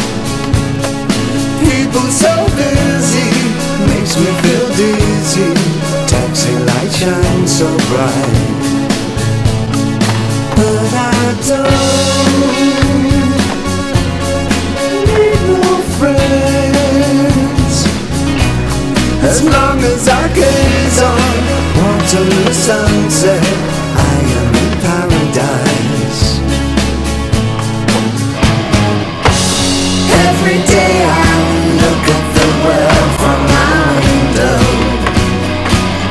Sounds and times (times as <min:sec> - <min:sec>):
Music: 0:00.0 - 0:36.1.